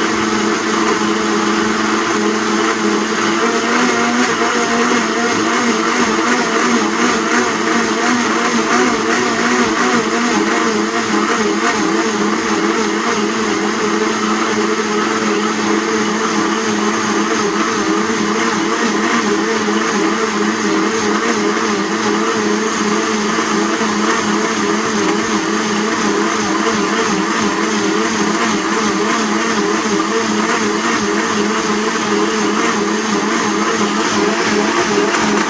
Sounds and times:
Blender: 0:00.0 - 0:35.5.

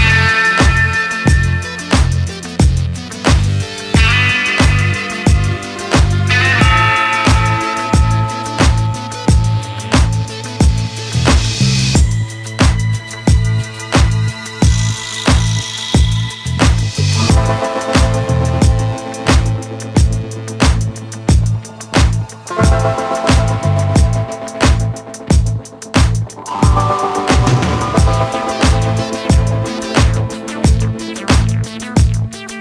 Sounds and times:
Music: 0:00.0 - 0:32.6.

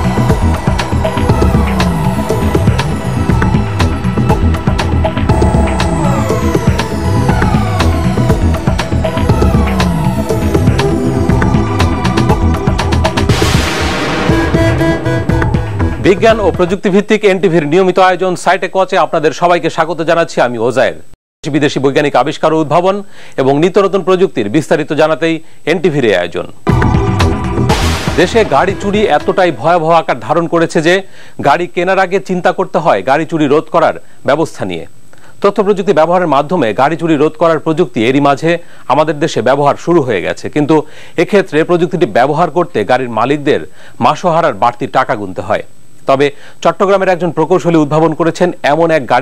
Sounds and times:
Music: 0:00.0 - 0:17.0, 0:26.6 - 0:30.3
Speech: 0:16.0 - 0:26.6, 0:28.2 - 0:49.2.

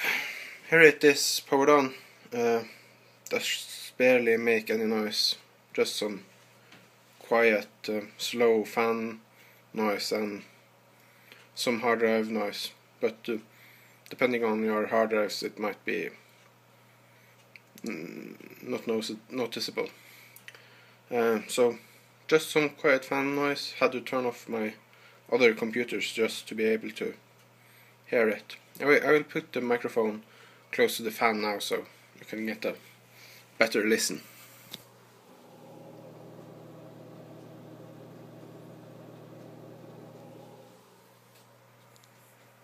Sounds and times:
Speech: 0:00.7 - 0:06.3, 0:07.2 - 0:09.2, 0:09.8 - 0:10.5, 0:11.6 - 0:13.5, 0:14.1 - 0:16.2, 0:17.8 - 0:20.0, 0:21.1 - 0:27.2, 0:28.1 - 0:32.8, 0:33.6 - 0:34.3.

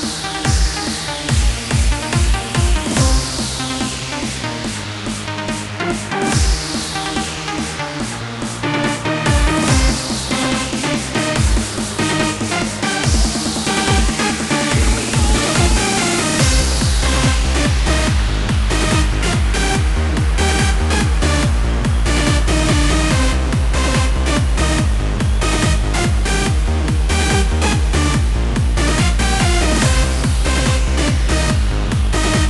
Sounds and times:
Music: 0:00.0 - 0:32.5.

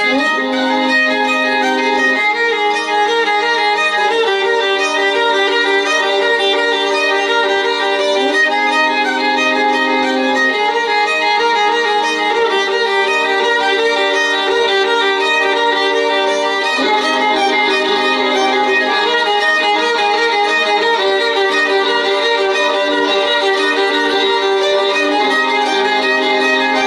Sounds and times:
Violin, fiddle: 0:00.0 - 0:26.8.

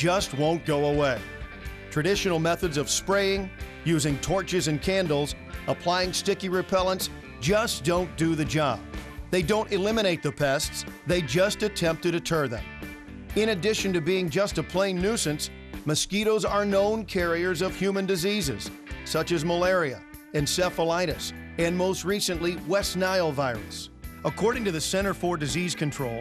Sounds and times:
Speech: 0:00.0 - 0:01.2, 0:01.9 - 0:12.7, 0:13.4 - 0:26.2
Music: 0:00.0 - 0:26.2.

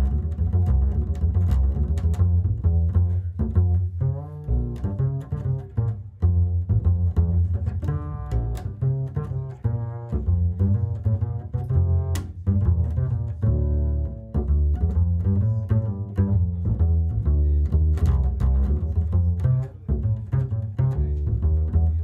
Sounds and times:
Cello: 0:00.0 - 0:22.0
Double bass: 0:00.0 - 0:22.0
Pizzicato: 0:00.0 - 0:22.0.

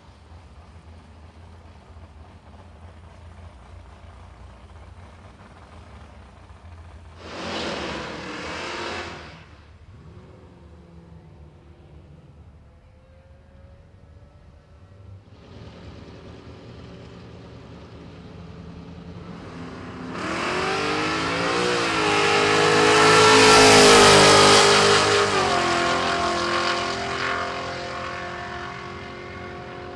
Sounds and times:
Car passing by: 0:07.2 - 0:15.9.

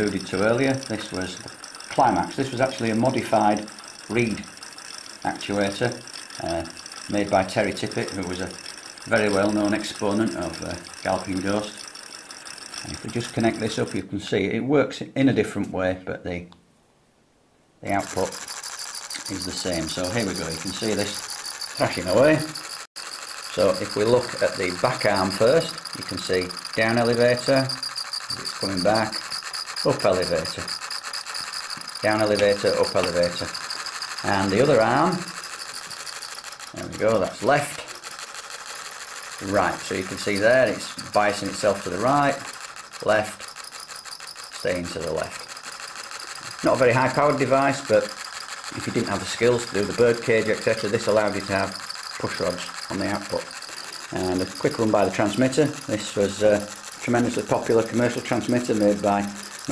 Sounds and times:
Speech: 0:00.0 - 0:04.4, 0:05.3 - 0:11.8, 0:12.9 - 0:16.5, 0:17.8 - 0:18.4, 0:19.3 - 0:21.2, 0:21.8 - 0:22.5, 0:23.6 - 0:27.7, 0:28.4 - 0:29.2, 0:29.9 - 0:30.7, 0:32.0 - 0:33.5, 0:34.3 - 0:35.3, 0:36.8 - 0:37.9, 0:39.4 - 0:42.4, 0:43.0 - 0:43.4, 0:44.6 - 0:45.4, 0:46.6 - 0:48.1, 0:48.8 - 0:53.4, 0:54.1 - 0:59.7.

